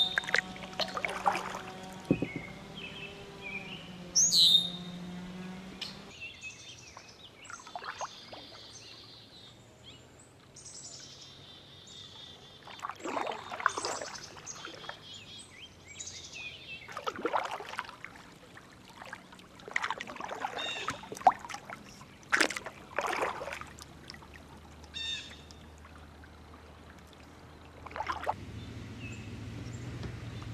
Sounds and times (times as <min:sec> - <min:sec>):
Environmental noise: 0:00.0 - 0:30.5
Rowboat, canoe, kayak: 0:00.0 - 0:30.5.